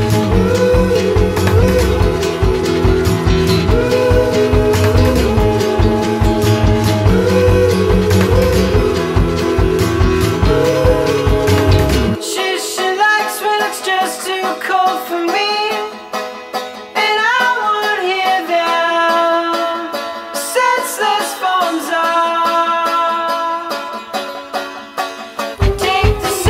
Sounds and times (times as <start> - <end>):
Soundtrack music: 0.0 - 13.0.